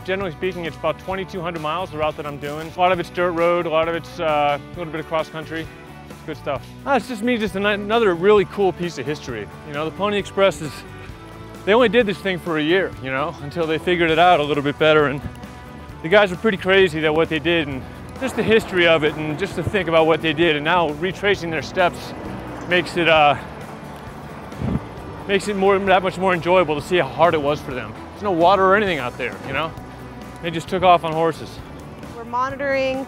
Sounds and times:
Music: 0:00.0 - 0:33.0.

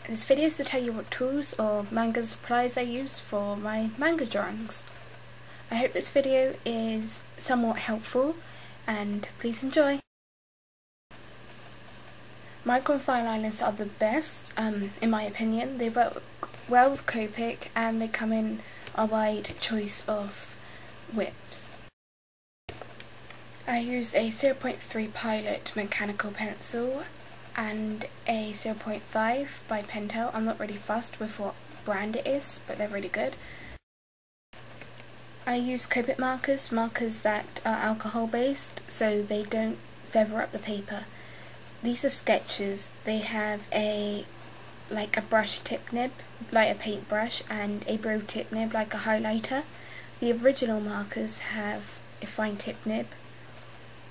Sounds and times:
Speech: 0:00.0 - 0:04.9, 0:05.7 - 0:10.1, 0:12.6 - 0:21.8, 0:23.7 - 0:33.4, 0:35.4 - 0:41.1, 0:41.8 - 0:44.3, 0:44.9 - 0:53.2.

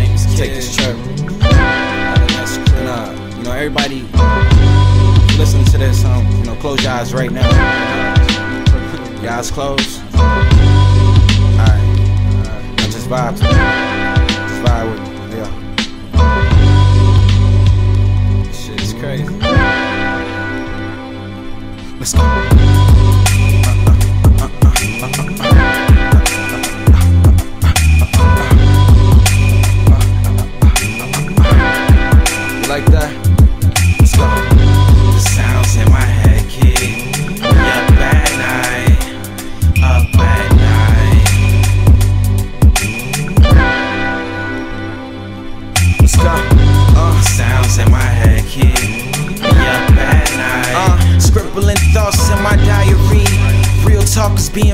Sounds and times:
Music: 0:00.0 - 0:54.7.

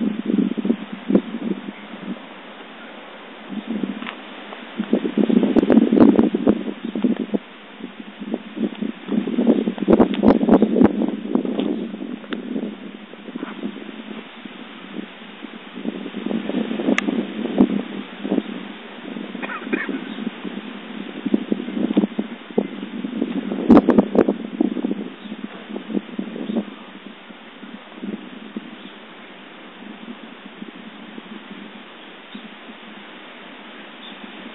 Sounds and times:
Outside, rural or natural: 0:00.0 - 0:34.5.

